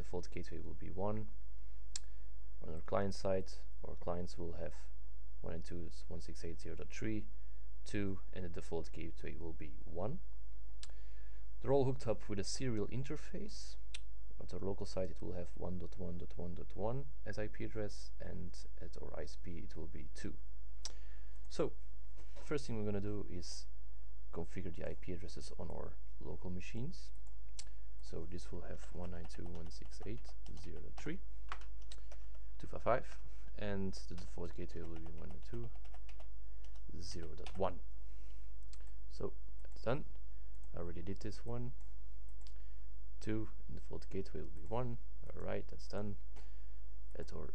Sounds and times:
Speech: 0.0s - 1.3s, 2.6s - 10.2s, 11.6s - 20.4s, 21.5s - 21.8s, 22.4s - 23.7s, 24.3s - 27.2s, 28.0s - 31.2s, 32.6s - 35.8s, 36.9s - 37.8s, 39.1s - 40.1s, 40.7s - 41.8s, 43.2s - 46.2s, 47.2s - 47.5s.

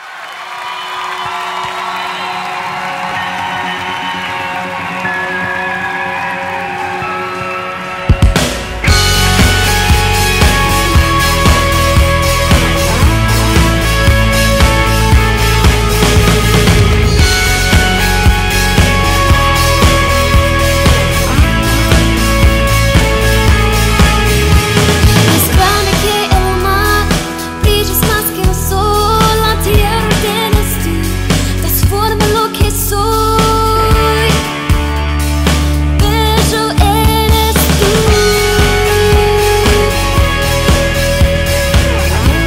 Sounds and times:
Rhythm and blues: 1.0s - 42.4s.

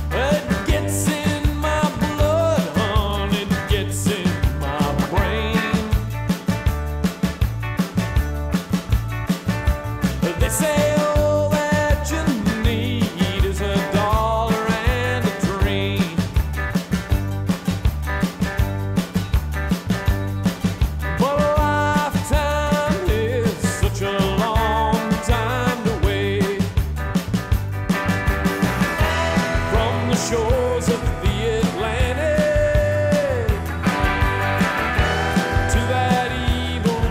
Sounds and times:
Music: 0.0s - 37.1s.

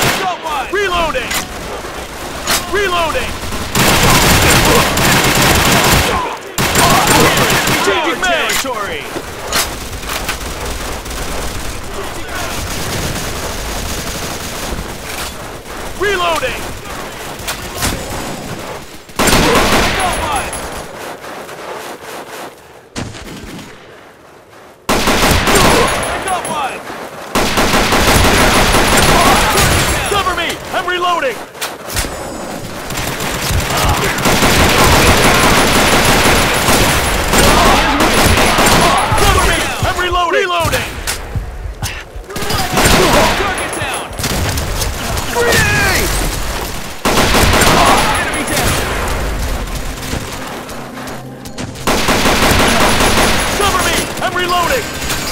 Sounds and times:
Speech: 0.1s - 1.5s, 2.5s - 3.3s, 6.0s - 9.2s, 16.0s - 16.7s, 19.4s - 20.6s, 25.5s - 26.8s, 29.1s - 31.5s, 33.7s - 34.2s, 37.4s - 41.0s, 41.8s - 44.2s, 45.0s - 46.2s, 47.6s - 48.9s, 53.6s - 54.9s.

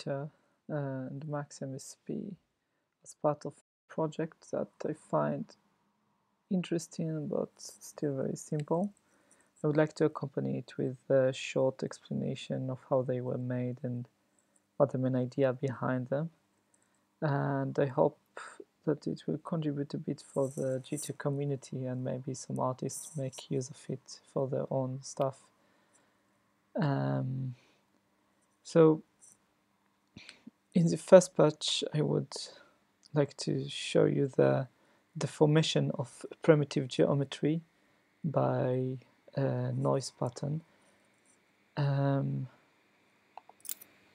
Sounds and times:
Speech: 0.0s - 2.4s, 3.1s - 5.6s, 6.5s - 9.0s, 9.6s - 14.1s, 14.8s - 16.4s, 17.2s - 25.5s, 26.8s - 27.6s, 28.6s - 29.1s, 30.8s - 40.7s, 41.8s - 42.6s.

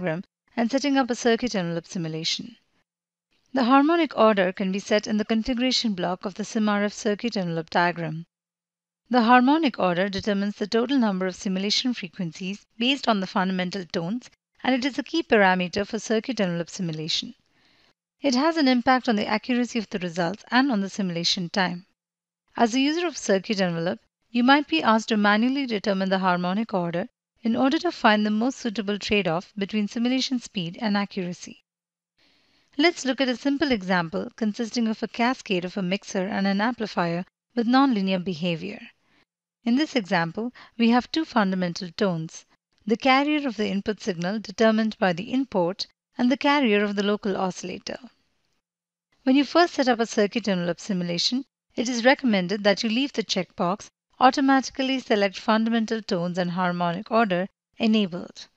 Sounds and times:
Speech: 0.0s - 2.6s, 3.6s - 8.3s, 9.1s - 17.4s, 18.2s - 21.9s, 22.6s - 31.6s, 32.8s - 38.9s, 39.7s - 48.1s, 49.3s - 58.5s.

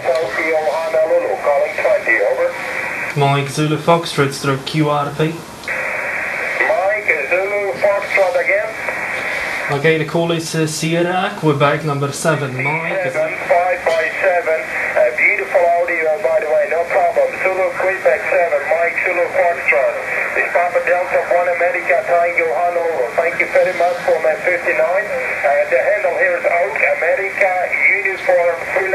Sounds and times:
Speech: 0.0s - 5.4s, 6.6s - 8.8s, 9.6s - 28.9s.

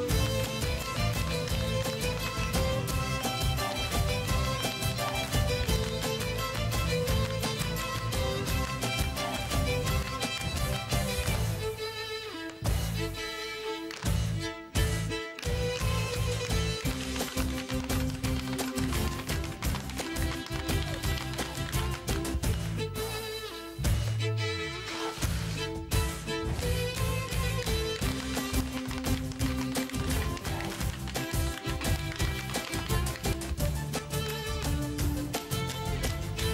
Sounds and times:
Violin, fiddle: 0.0s - 36.5s.

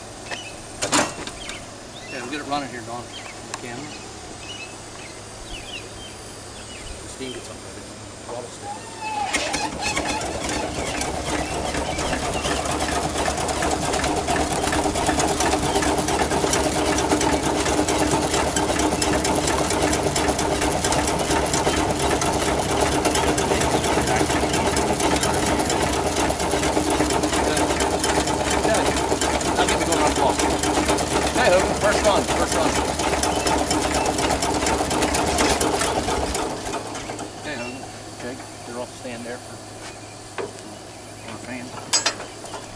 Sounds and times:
Motorcycle: 8.8s - 38.4s.

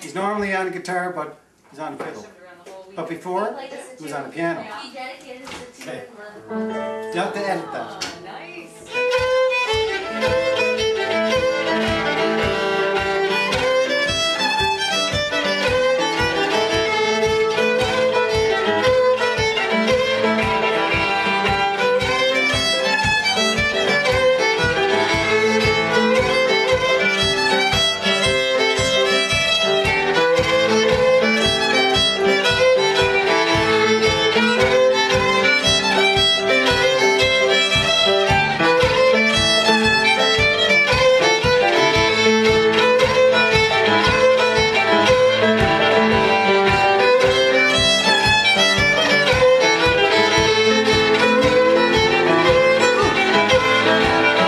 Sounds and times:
Violin, fiddle: 7.2s - 54.4s.

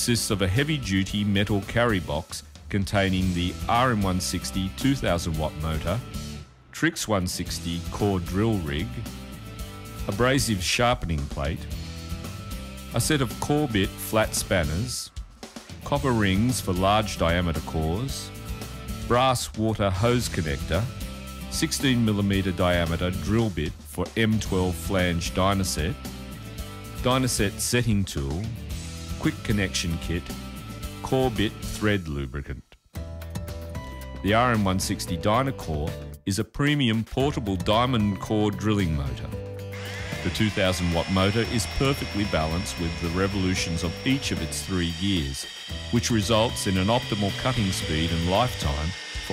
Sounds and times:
Speech: 0.0s - 6.2s, 6.8s - 9.2s, 10.0s - 11.8s, 12.9s - 15.2s, 15.8s - 18.4s, 19.0s - 26.0s, 27.0s - 30.4s, 31.0s - 32.8s, 34.2s - 39.4s, 40.2s - 49.3s
Music: 0.0s - 49.3s.

